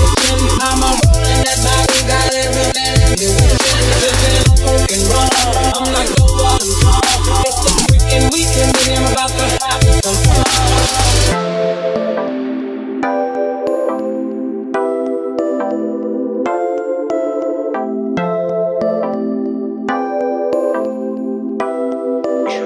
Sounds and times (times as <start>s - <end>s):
Drum and bass: 0.0s - 12.2s.